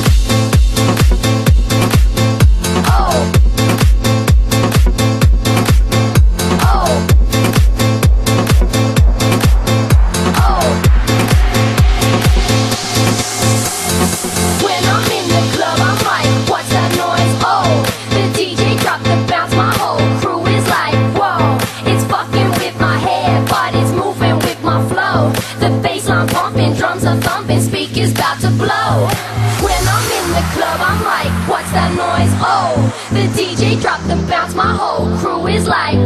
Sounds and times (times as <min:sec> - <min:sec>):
Music: 0:00.0 - 0:36.0.